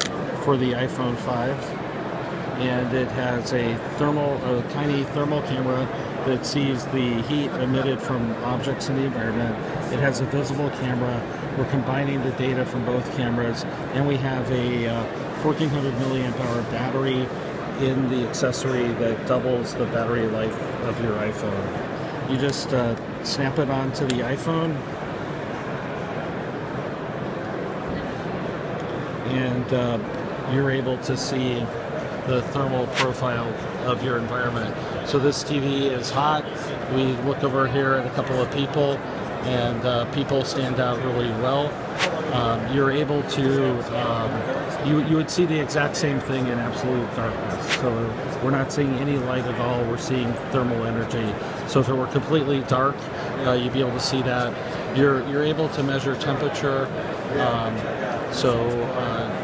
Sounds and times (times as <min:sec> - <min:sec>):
Speech: 0:00.0 - 0:01.8, 0:02.6 - 0:24.9, 0:29.2 - 0:59.4.